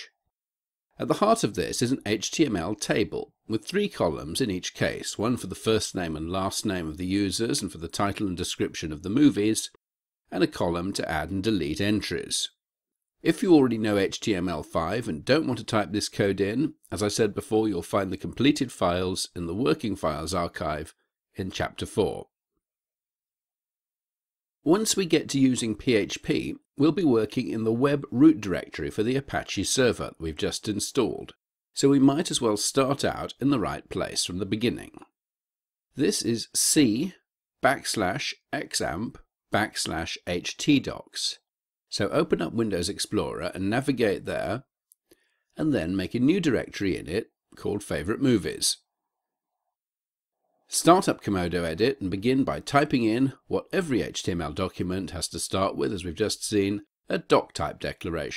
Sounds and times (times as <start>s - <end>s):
Speech: 1.0s - 12.6s, 13.2s - 22.3s, 24.6s - 35.1s, 36.0s - 44.7s, 45.6s - 48.9s, 50.7s - 58.3s.